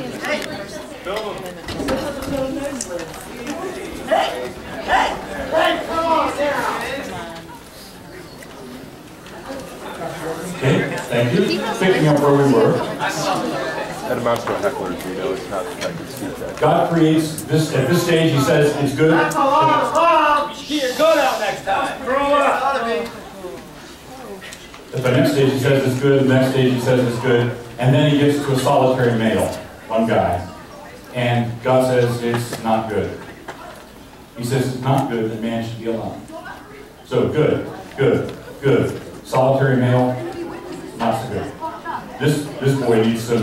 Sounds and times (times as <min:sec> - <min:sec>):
Male speech, man speaking: 0:03.6 - 0:07.2, 0:10.4 - 0:23.2, 0:24.9 - 0:33.3, 0:34.4 - 0:36.4, 0:37.1 - 0:41.6, 0:42.2 - 0:43.4
Narration, monologue: 0:24.5 - 0:41.6.